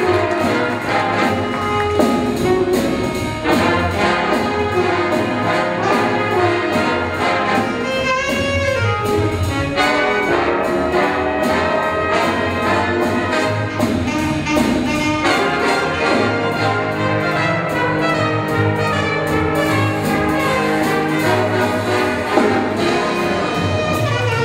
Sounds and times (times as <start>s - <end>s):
Inside, large room or hall: 0.0s - 24.4s
Music: 0.0s - 24.4s.